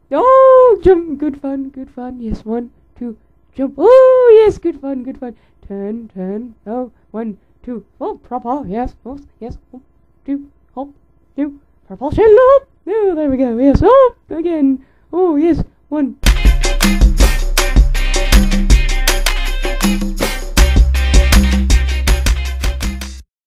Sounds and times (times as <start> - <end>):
Speech: 0.1 - 16.2
Music: 16.2 - 23.2.